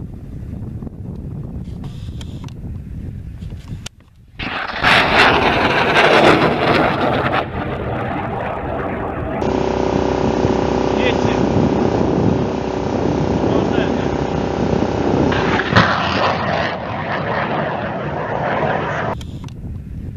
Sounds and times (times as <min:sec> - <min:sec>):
Outside, rural or natural: 0:00.0 - 0:20.1
Speech: 0:11.0 - 0:11.5, 0:13.5 - 0:14.2.